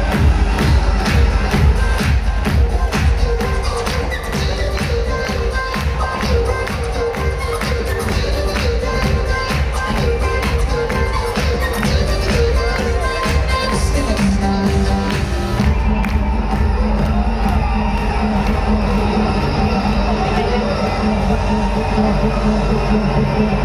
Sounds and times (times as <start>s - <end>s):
Music: 0.0s - 23.6s.